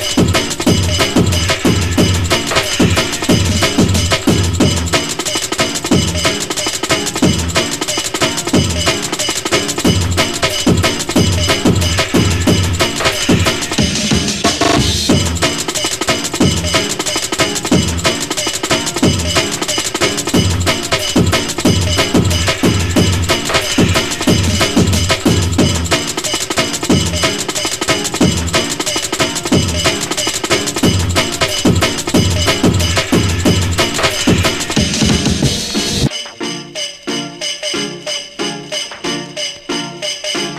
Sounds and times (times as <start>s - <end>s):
Music: 0.0s - 40.5s.